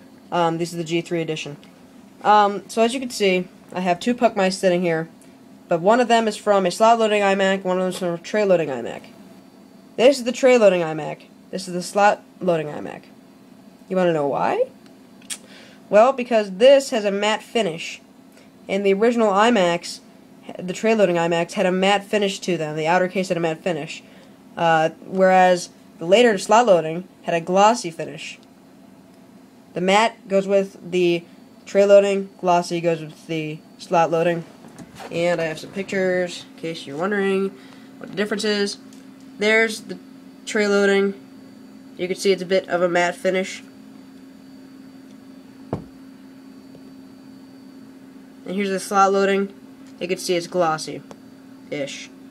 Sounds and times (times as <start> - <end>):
Speech: 0.3 - 5.1, 5.7 - 9.1, 10.0 - 13.1, 13.9 - 14.8, 15.9 - 18.1, 18.7 - 28.4, 29.8 - 38.8, 39.4 - 41.2, 42.0 - 43.7, 48.4 - 51.1, 51.7 - 52.2.